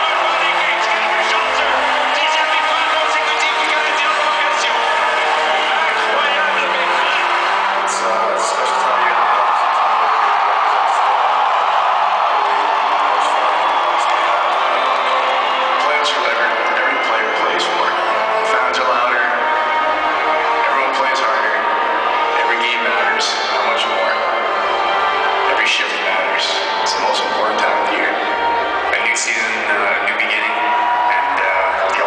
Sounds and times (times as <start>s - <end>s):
Speech: 0.0s - 11.3s, 15.8s - 19.5s, 20.5s - 24.5s, 25.5s - 28.2s, 28.9s - 32.0s
Music: 0.0s - 32.0s.